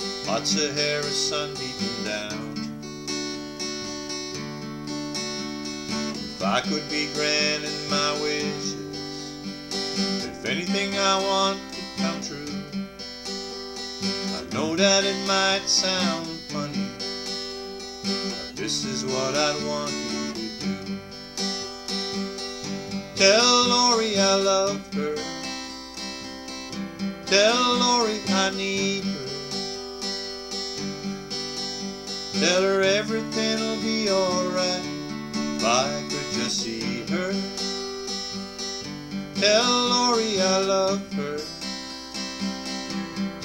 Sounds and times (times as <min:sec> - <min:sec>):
Music: 0:00.0 - 0:43.4
Male singing: 0:00.3 - 0:02.6, 0:06.4 - 0:09.0, 0:10.2 - 0:12.8, 0:14.3 - 0:16.9, 0:18.3 - 0:20.9, 0:23.2 - 0:25.4, 0:27.3 - 0:29.6, 0:32.4 - 0:35.0, 0:35.6 - 0:37.6, 0:39.4 - 0:41.6.